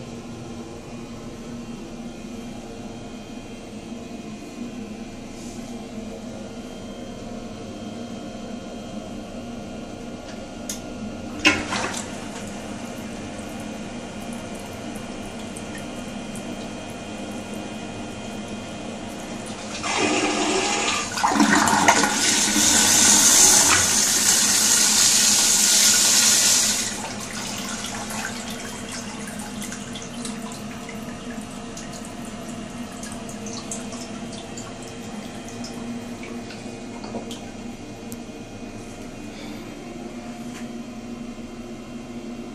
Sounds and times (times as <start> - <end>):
Toilet flush: 11.4 - 37.6.